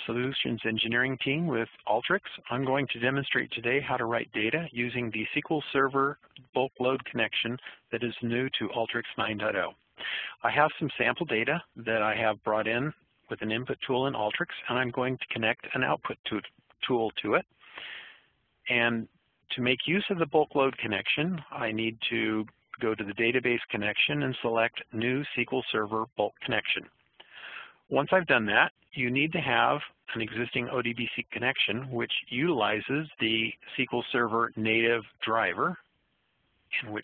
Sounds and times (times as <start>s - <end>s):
Speech: 0.0s - 9.8s, 10.4s - 17.5s, 18.7s - 26.9s, 27.9s - 35.9s, 36.7s - 37.0s.